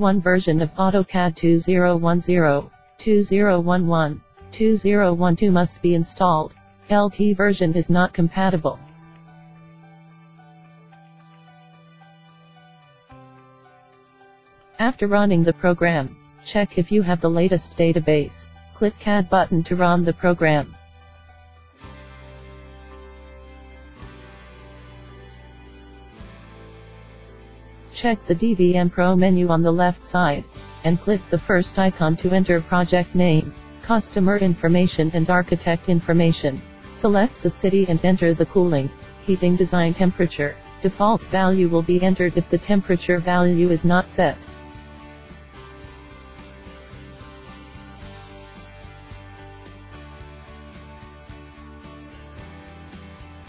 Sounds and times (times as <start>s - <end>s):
Speech: 0.0s - 8.8s, 14.8s - 20.8s, 28.0s - 44.5s
Music: 0.0s - 53.4s.